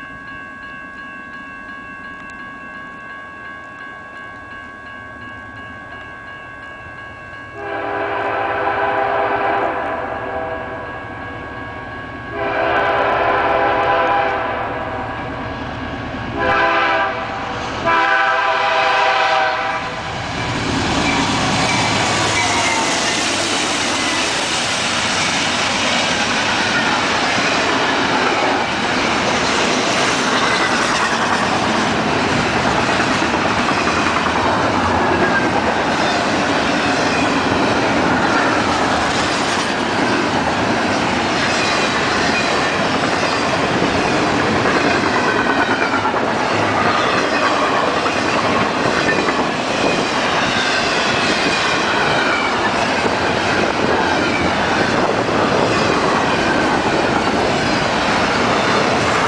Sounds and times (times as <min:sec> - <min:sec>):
Railroad car, train wagon: 0:00.0 - 0:59.2
Train: 0:00.0 - 0:59.2
Clickety-clack: 0:21.0 - 0:59.2.